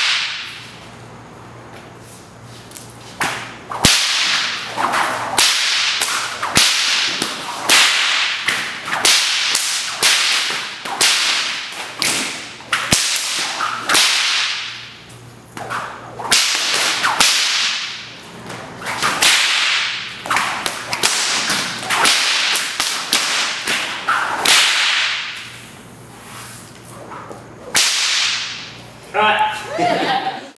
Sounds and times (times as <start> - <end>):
Whip: 0.0 - 0.7, 2.7 - 25.6, 27.7 - 28.8.